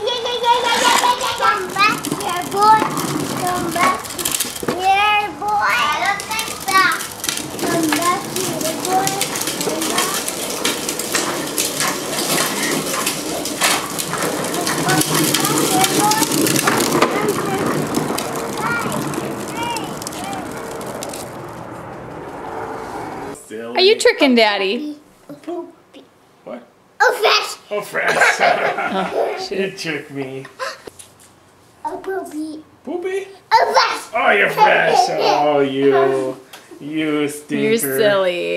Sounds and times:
Child speech, kid speaking: 0.0s - 10.4s, 14.4s - 20.6s, 24.7s - 26.1s, 27.0s - 27.7s, 31.8s - 32.7s, 33.3s - 36.4s, 37.5s - 38.5s
Children playing: 0.0s - 21.1s, 33.5s - 36.4s.

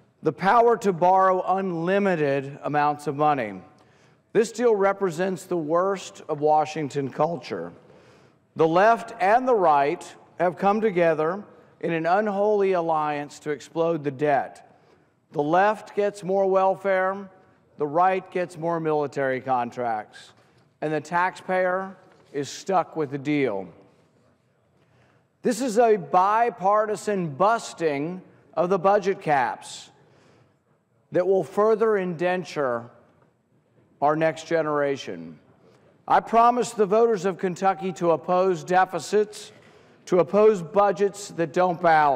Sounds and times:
Male speech, man speaking: 0.2s - 3.7s, 4.4s - 7.8s, 8.6s - 14.6s, 15.4s - 23.8s, 25.4s - 30.0s, 31.1s - 33.0s, 34.0s - 35.4s, 36.1s - 39.5s, 40.1s - 42.1s.

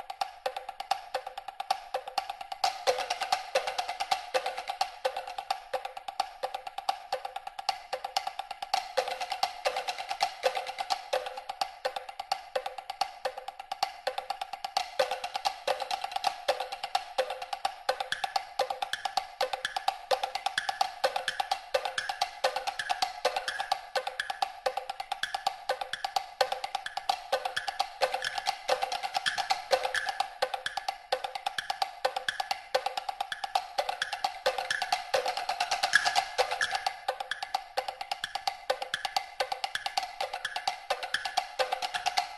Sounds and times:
Wood block: 0.0s - 42.3s.

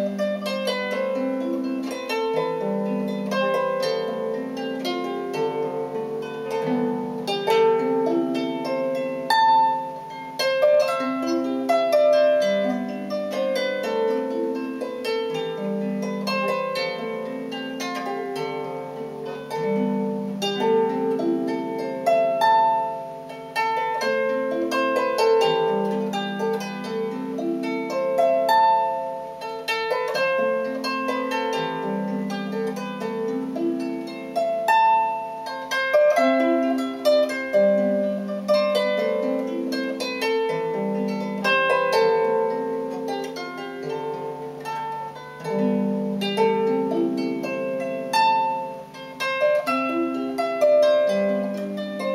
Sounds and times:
Harp: 0.0s - 52.1s.

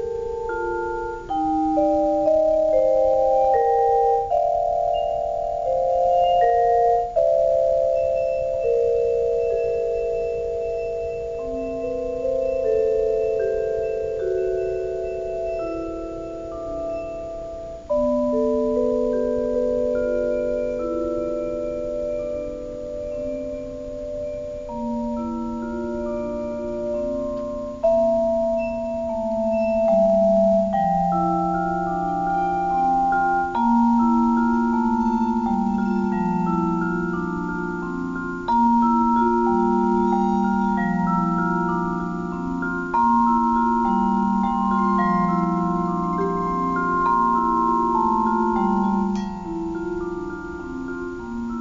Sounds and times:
Glockenspiel: 0.0s - 51.6s
Marimba, xylophone: 0.0s - 51.6s.

